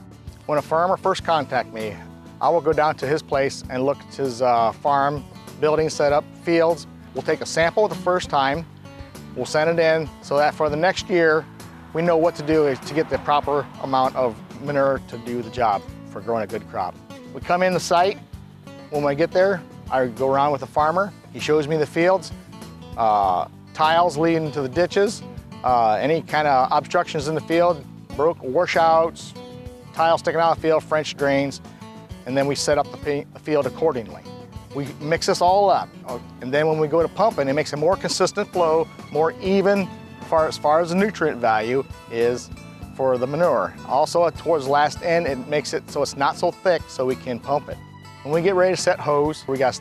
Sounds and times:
Music: 0.0 - 49.8
Speech: 0.5 - 8.6, 9.4 - 18.2, 18.9 - 22.3, 23.0 - 29.4, 30.0 - 31.6, 32.2 - 49.8.

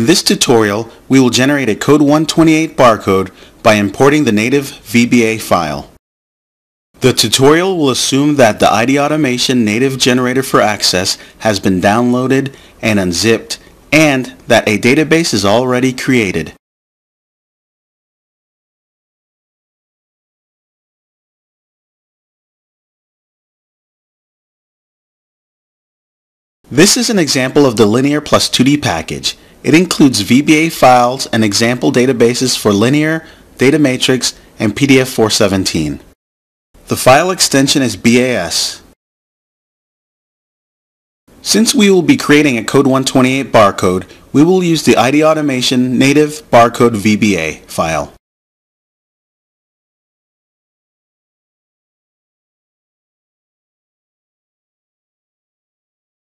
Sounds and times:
Speech: 0.0 - 6.0, 7.0 - 16.6, 26.7 - 36.2, 36.9 - 39.0, 41.4 - 48.2.

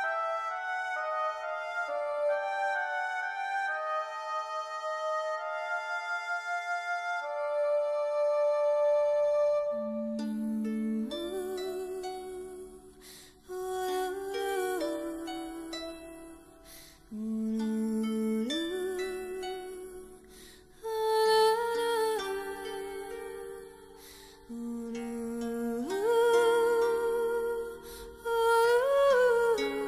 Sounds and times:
Music: 0.0 - 29.8.

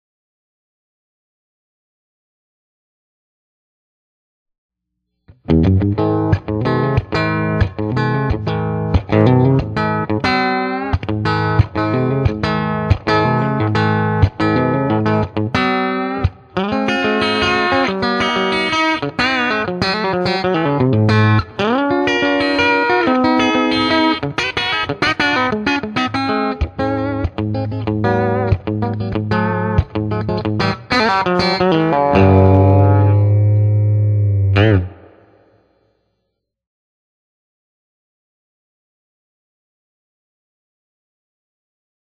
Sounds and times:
Bass guitar: 5.3 - 35.3
Electric guitar: 5.3 - 35.6
Distortion: 5.3 - 36.1.

